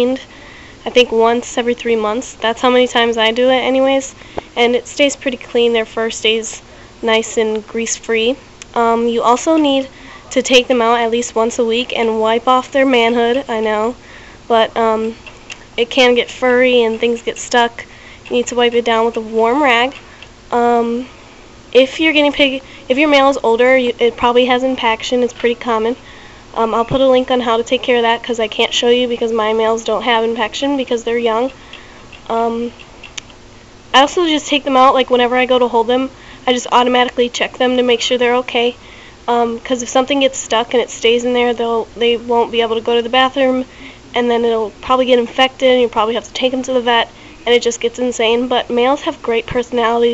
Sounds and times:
Speech: 0.0s - 15.2s, 15.8s - 21.1s, 21.8s - 26.0s, 26.6s - 31.6s, 32.3s - 32.8s, 34.0s - 50.1s.

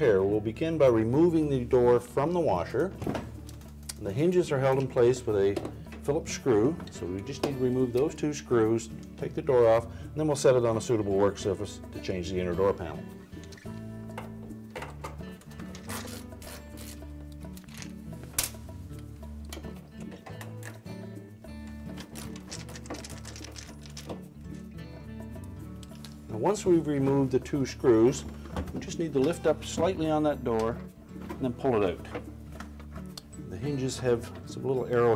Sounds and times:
Speech: 0.0s - 2.9s, 4.0s - 13.0s, 26.3s - 28.2s, 28.8s - 30.8s, 31.4s - 32.2s, 33.5s - 35.1s
Music: 0.0s - 35.1s.

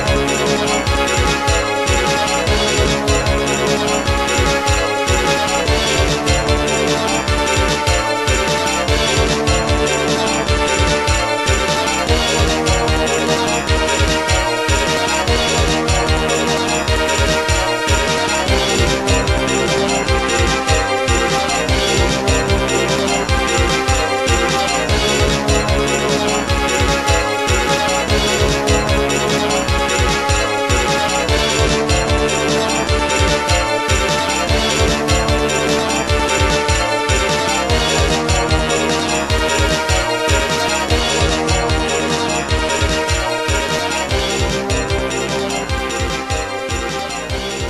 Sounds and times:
Music: 0.0s - 47.7s.

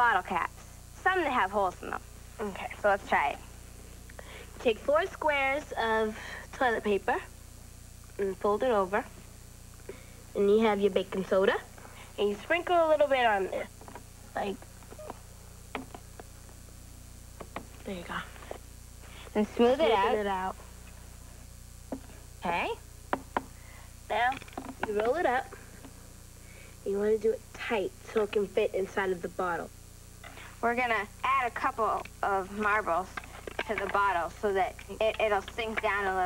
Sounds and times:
Speech: 0.0s - 3.5s, 4.6s - 7.3s, 8.2s - 9.2s, 10.4s - 13.7s, 19.3s - 20.6s, 22.4s - 22.8s, 24.1s - 25.5s, 26.8s - 29.7s, 30.5s - 36.2s.

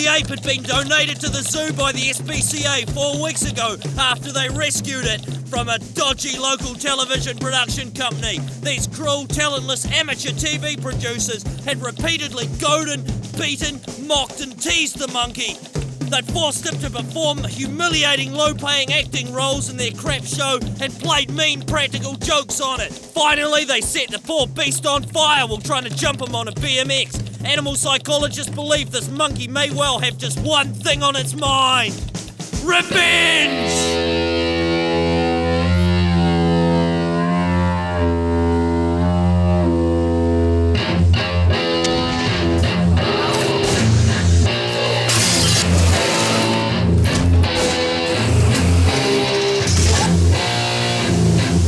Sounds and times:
Speech: 0.0s - 32.0s, 32.6s - 34.0s, 49.8s - 50.2s
Music: 0.0s - 51.6s.

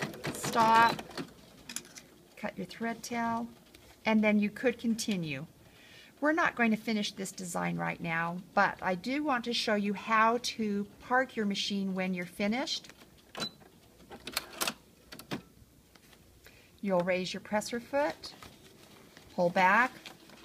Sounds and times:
Inside, small room: 0.0s - 20.4s
Speech: 0.3s - 1.0s, 2.4s - 3.5s, 4.1s - 5.5s, 6.2s - 12.8s, 16.8s - 18.4s, 19.4s - 20.0s.

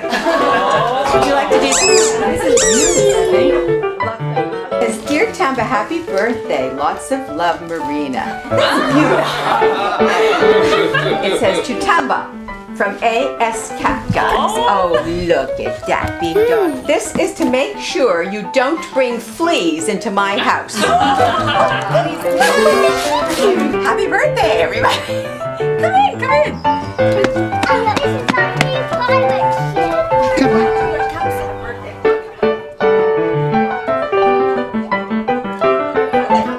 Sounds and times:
Music: 0.0s - 36.5s.

